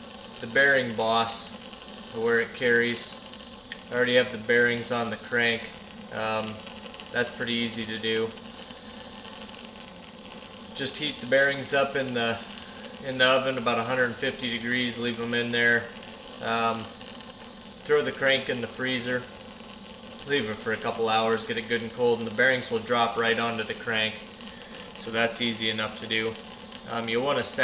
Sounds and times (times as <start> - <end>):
Speech: 0.4 - 1.5, 2.2 - 3.2, 3.9 - 6.6, 7.2 - 8.4, 10.8 - 16.9, 17.9 - 19.3, 20.2 - 24.2, 25.0 - 27.6.